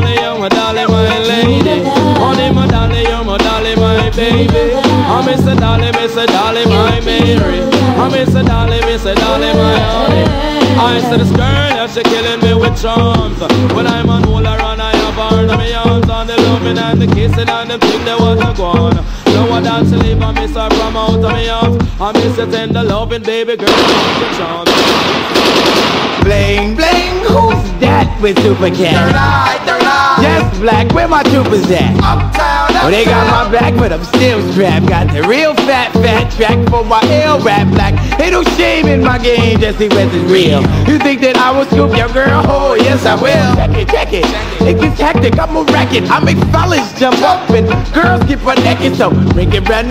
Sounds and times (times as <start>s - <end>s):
Machine gun: 23.7s - 26.2s.